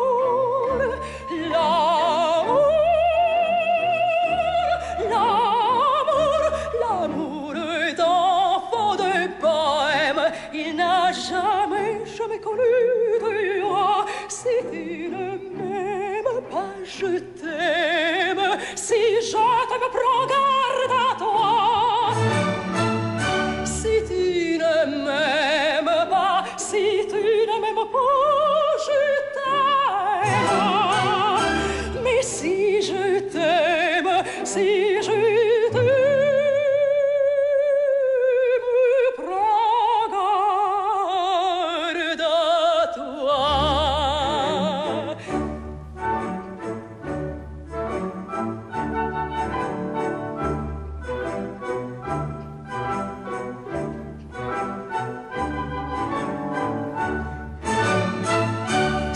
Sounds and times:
Opera: 0:00.0 - 0:59.1
Orchestra: 0:00.0 - 0:59.1.

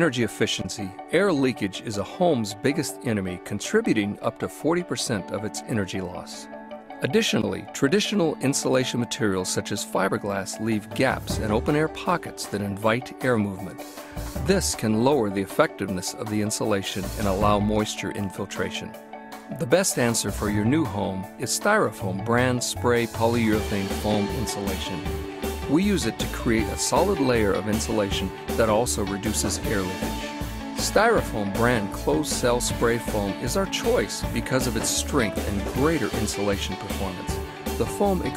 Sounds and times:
Speech: 0:00.0 - 0:06.4, 0:07.0 - 0:13.8, 0:14.4 - 0:18.9, 0:19.5 - 0:25.1, 0:25.7 - 0:30.2, 0:30.8 - 0:38.3
Music: 0:00.0 - 0:38.3.

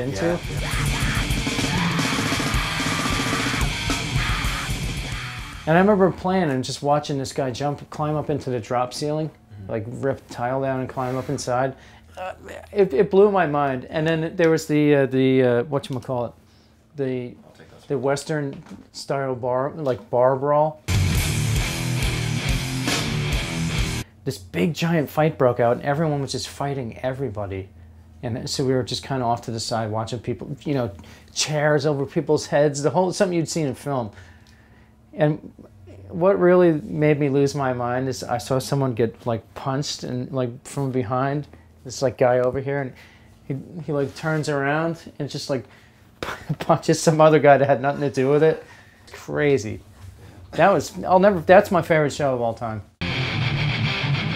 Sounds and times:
Speech: 0:00.0 - 0:01.1, 0:05.7 - 0:16.4, 0:17.0 - 0:20.8, 0:24.2 - 0:34.2, 0:35.1 - 0:45.7, 0:46.4 - 0:49.8, 0:50.6 - 0:53.0
Music: 0:00.0 - 0:05.9, 0:20.9 - 0:24.1, 0:53.0 - 0:54.3.

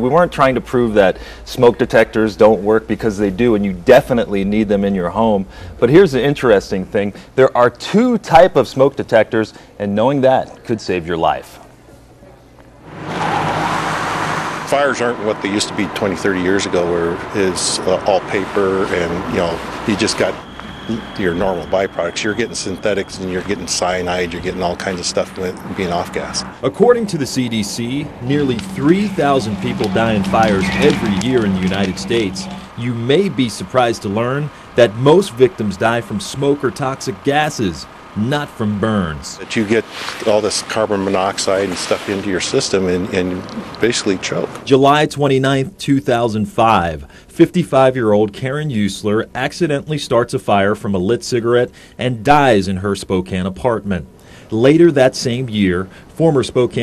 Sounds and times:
Speech: 0:00.0 - 0:11.7, 0:14.7 - 0:56.8.

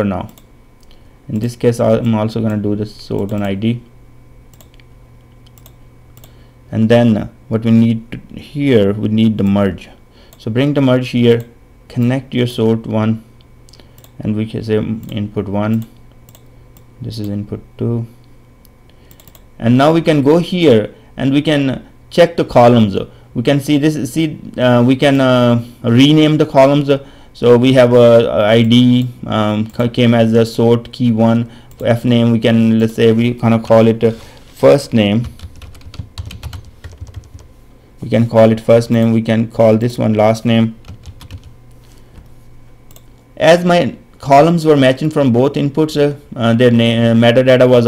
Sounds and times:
Computer keyboard: 0:35.2 - 0:37.5, 0:40.8 - 0:41.6.

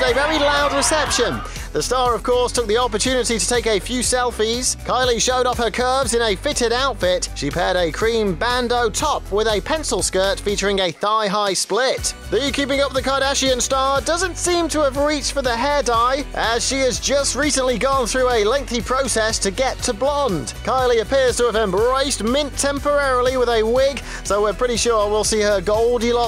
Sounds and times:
Music: 0:00.0 - 0:26.2
Speech: 0:00.0 - 0:26.2.

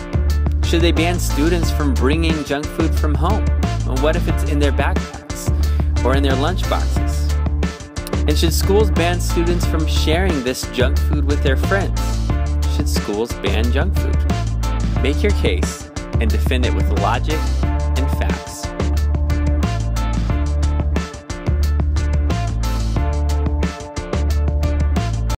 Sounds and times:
Music: 0:00.0 - 0:25.4
Speech: 0:00.6 - 0:07.3, 0:08.1 - 0:12.1, 0:12.7 - 0:14.2, 0:15.0 - 0:18.7.

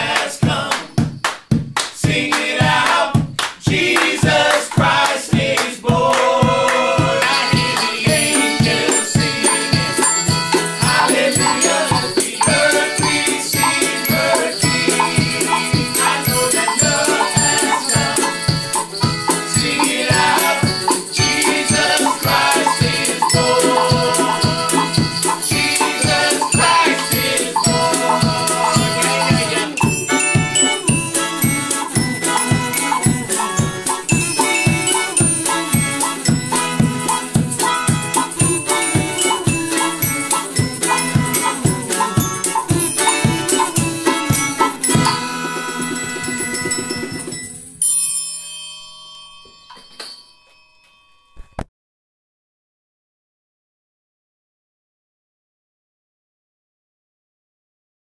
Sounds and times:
Musical instrument: 0:06.2 - 0:51.7.

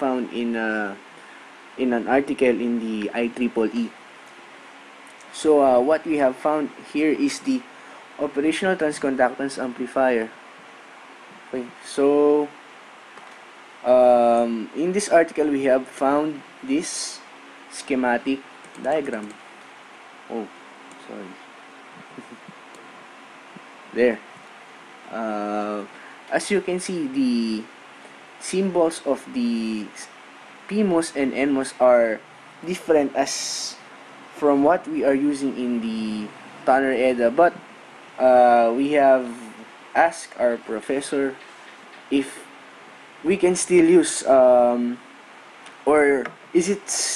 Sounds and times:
Speech: 0:00.0 - 0:01.0, 0:01.8 - 0:04.0, 0:05.3 - 0:10.4, 0:11.5 - 0:12.6, 0:13.9 - 0:19.4, 0:20.3 - 0:21.4, 0:23.9 - 0:24.2, 0:25.1 - 0:27.7, 0:28.4 - 0:30.1, 0:30.7 - 0:33.8, 0:34.4 - 0:37.6, 0:38.2 - 0:41.4, 0:42.1 - 0:42.5, 0:43.2 - 0:45.0, 0:45.9 - 0:47.1.

